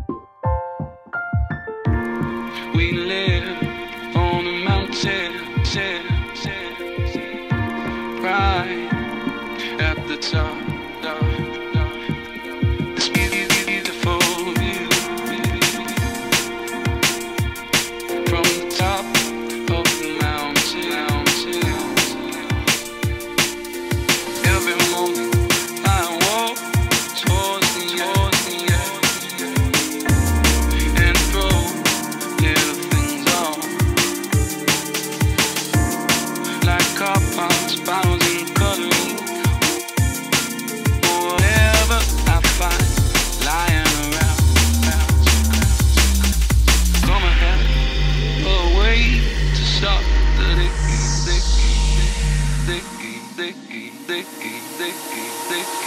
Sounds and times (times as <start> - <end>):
Music: 0.0 - 55.8.